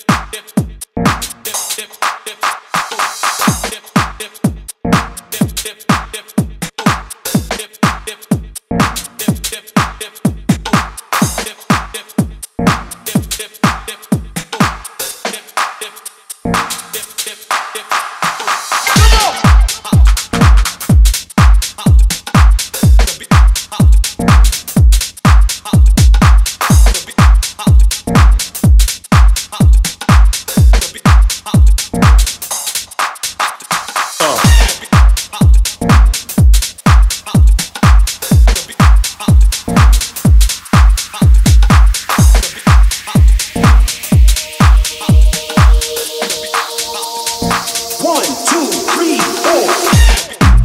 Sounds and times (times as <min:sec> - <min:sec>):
Music: 0:00.0 - 0:50.6.